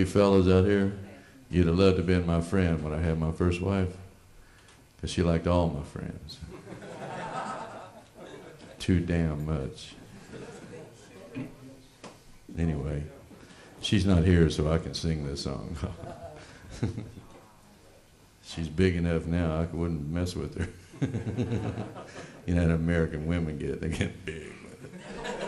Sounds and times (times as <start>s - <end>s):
Speech: 0.0s - 4.1s, 5.0s - 6.6s, 8.8s - 11.9s, 12.5s - 16.5s, 17.3s - 20.8s, 22.5s - 24.8s.